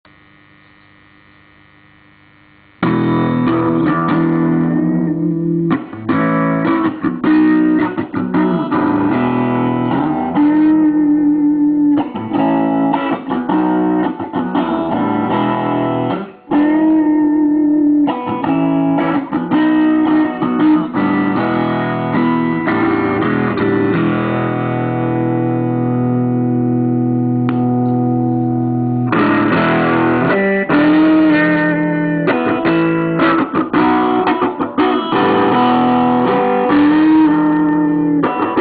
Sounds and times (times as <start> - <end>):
Effects unit: 0.0 - 38.6
Guitar: 0.0 - 38.6.